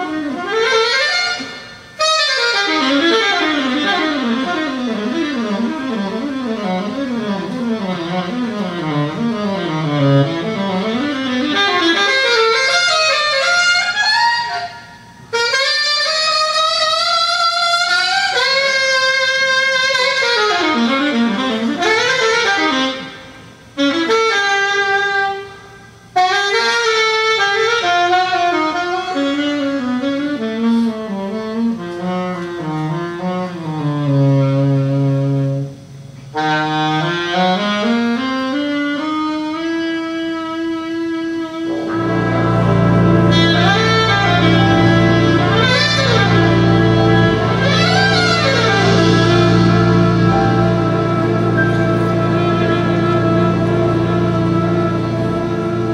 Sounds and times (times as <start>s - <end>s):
Brass instrument: 0.0s - 55.9s
Saxophone: 0.0s - 55.9s.